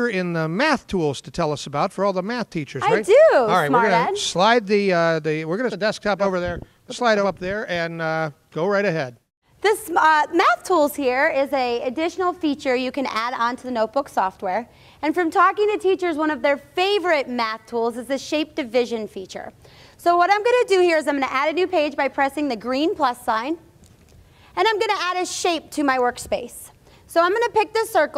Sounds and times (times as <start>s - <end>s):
Speech: 0.0s - 14.3s.